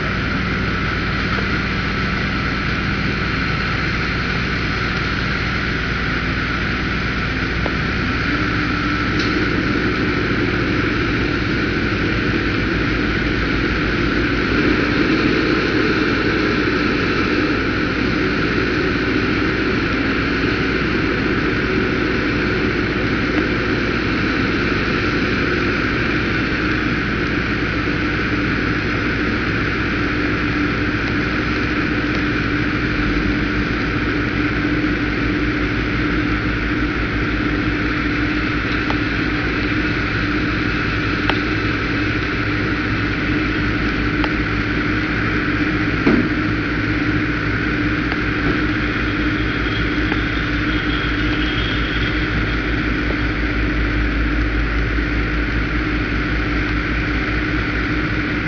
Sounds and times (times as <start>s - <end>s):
Truck: 0.0s - 58.4s.